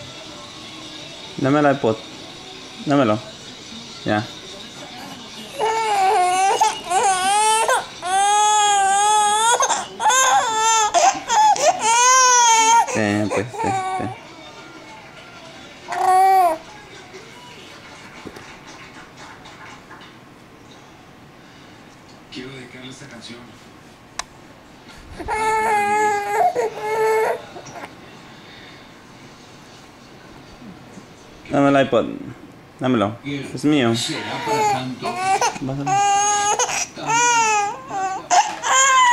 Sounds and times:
Baby cry, infant cry: 5.5s - 14.2s, 15.9s - 16.6s, 25.2s - 27.9s, 34.2s - 39.1s.

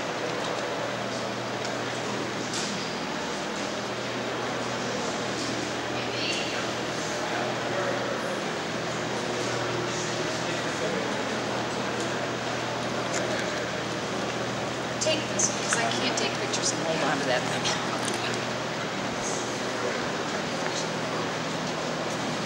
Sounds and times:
Speech: 9.2s - 13.8s, 15.0s - 18.4s.

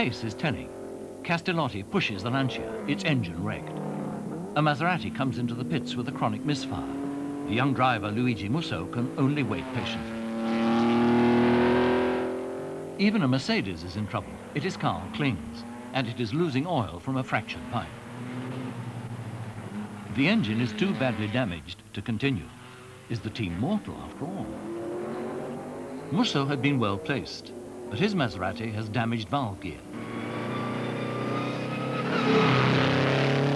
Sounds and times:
Car passing by: 9.6s - 12.5s.

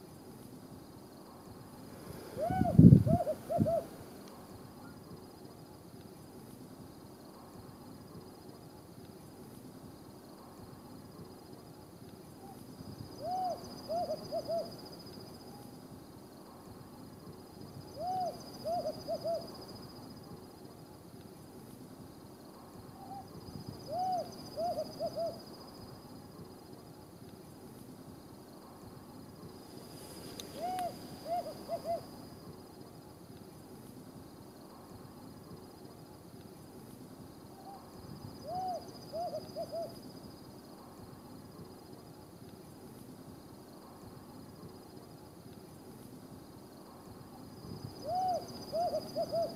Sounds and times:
Hoot: 2.3s - 4.0s, 13.2s - 14.8s, 18.0s - 19.6s, 23.0s - 25.4s, 30.4s - 32.1s, 37.6s - 40.0s, 48.0s - 49.5s.

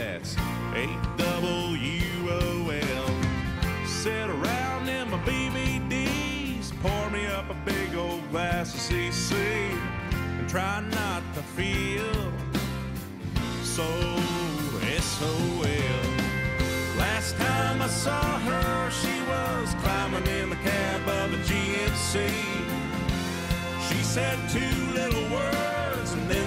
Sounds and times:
Music: 0.0s - 26.4s.

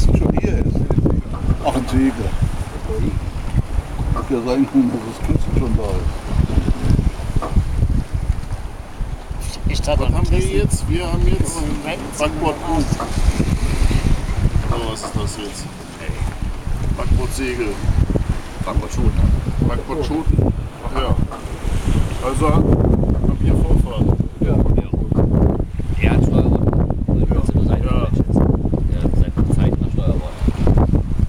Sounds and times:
Speech: 0.0s - 3.2s, 4.2s - 6.1s, 9.4s - 13.0s, 14.7s - 16.3s, 17.0s - 17.8s, 18.6s - 21.2s, 22.2s - 22.7s, 23.3s - 25.2s, 26.0s - 26.6s, 27.2s - 30.4s
Sailboat, sailing ship: 0.0s - 31.2s.

